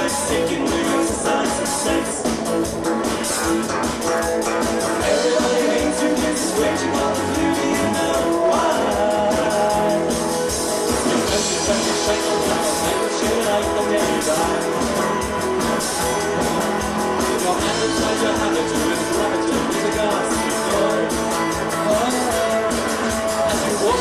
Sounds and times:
Blues: 0.0s - 24.0s
Independent music: 0.0s - 24.0s.

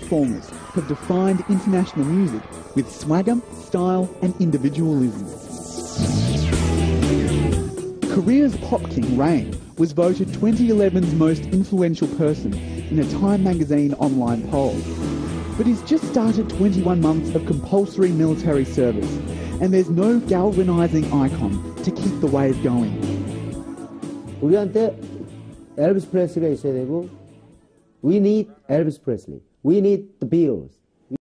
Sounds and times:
Speech: 0.0s - 5.4s, 8.1s - 14.8s, 15.6s - 23.0s, 24.4s - 25.0s, 25.8s - 27.1s, 28.0s - 31.2s
Music: 0.0s - 30.0s.

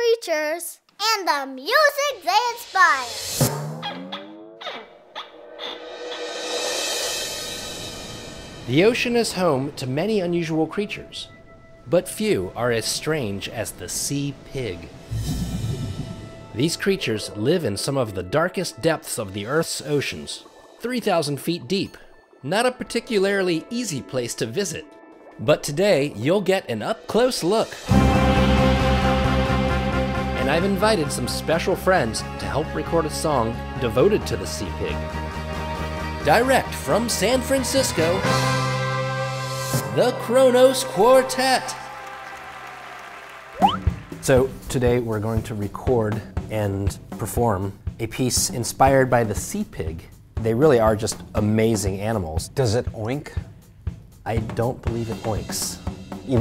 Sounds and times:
Speech: 8.7s - 11.3s, 11.9s - 14.9s, 16.6s - 27.8s, 30.4s - 35.0s, 36.2s - 38.2s, 39.8s - 41.8s, 44.2s - 53.4s, 54.3s - 56.4s.

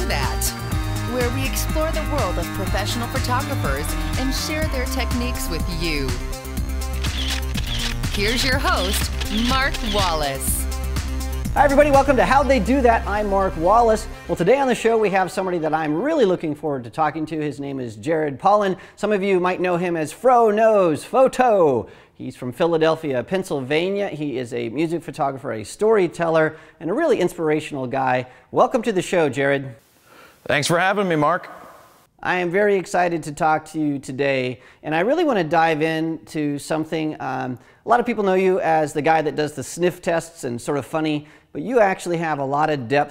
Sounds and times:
Speech: 8.2s - 10.6s, 30.5s - 31.5s, 32.2s - 43.1s.

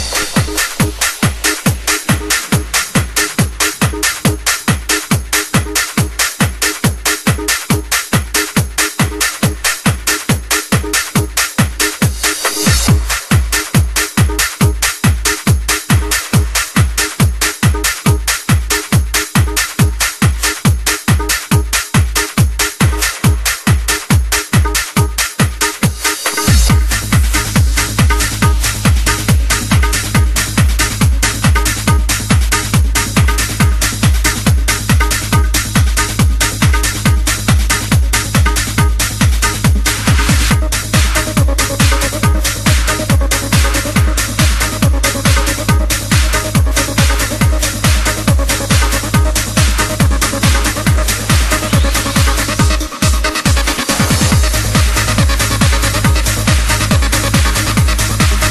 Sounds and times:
Techno: 0.0s - 58.5s.

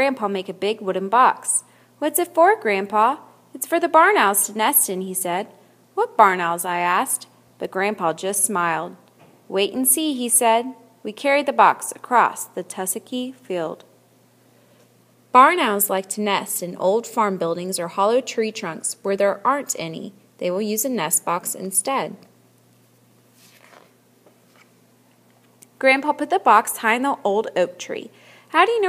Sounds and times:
Speech: 0.0s - 13.9s, 15.4s - 22.3s, 25.8s - 28.8s.

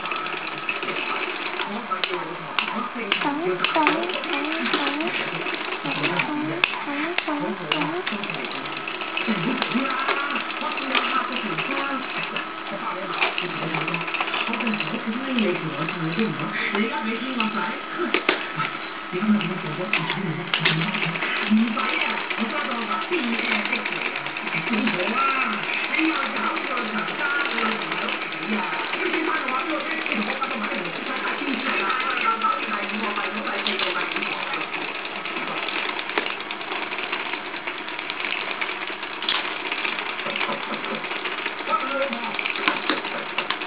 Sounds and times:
Ratchet, pawl: 0.0s - 18.7s, 19.3s - 43.6s
Gears: 0.0s - 43.6s.

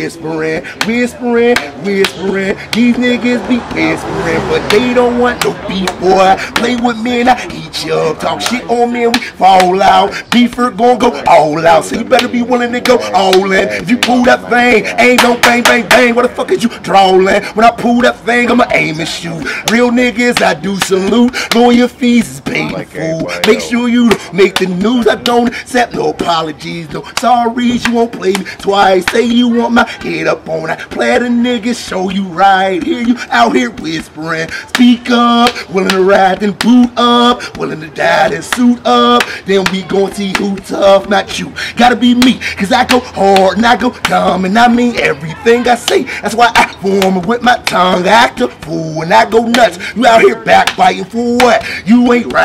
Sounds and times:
Speech: 4.6s - 35.9s, 42.9s - 52.4s.

